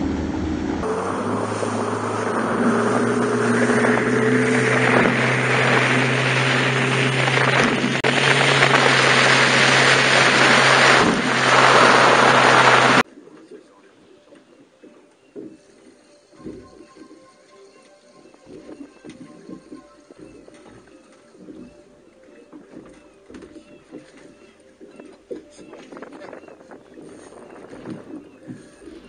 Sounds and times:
Motorboat, speedboat: 0.0 - 13.6, 14.4 - 29.0.

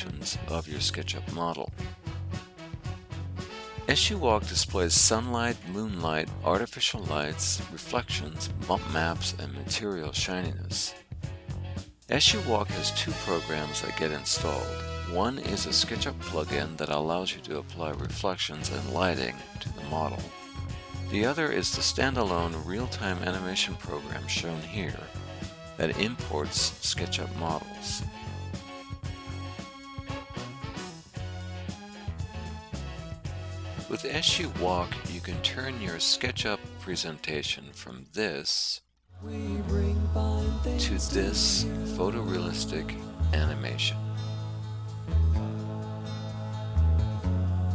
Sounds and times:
Speech: 0.0 - 1.7, 3.9 - 11.0, 12.1 - 20.3, 21.1 - 25.1, 25.8 - 28.1, 33.8 - 38.8, 40.7 - 44.0
Music: 0.0 - 37.8, 39.1 - 47.7.

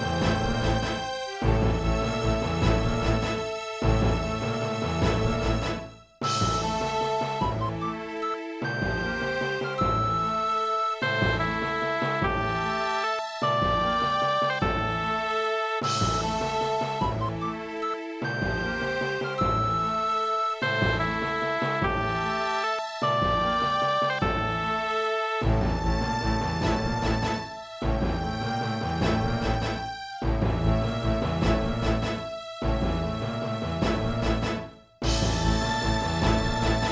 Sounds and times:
Music: 0.0 - 36.9.

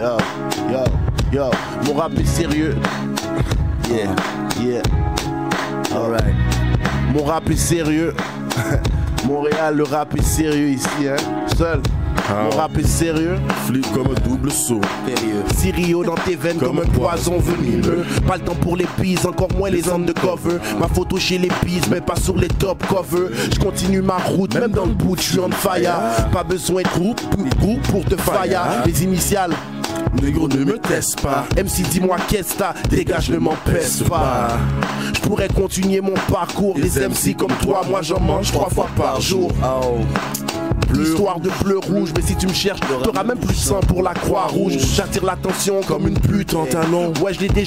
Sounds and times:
Music: 0.0 - 47.6.

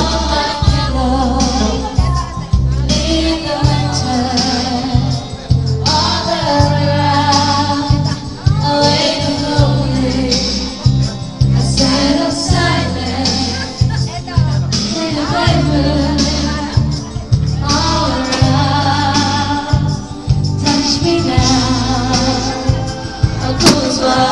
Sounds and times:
Female singing: 0.0 - 5.2, 5.9 - 10.7, 11.6 - 24.3
Music: 0.0 - 24.3.

